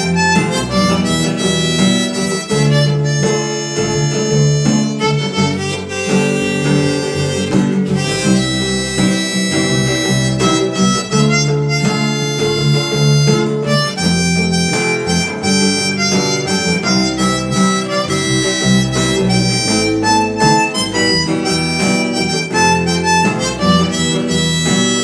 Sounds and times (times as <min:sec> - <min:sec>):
Harmonica: 0:00.0 - 0:25.0.